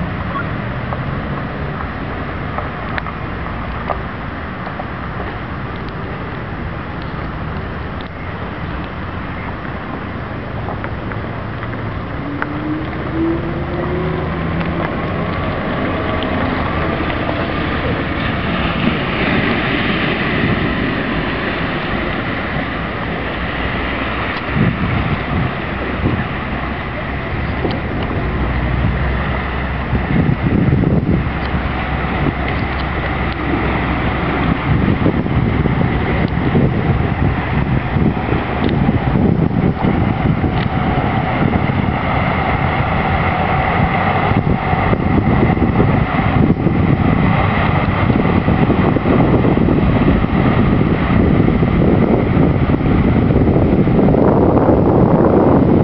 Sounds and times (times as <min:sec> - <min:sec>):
Bus: 0:00.0 - 0:55.8.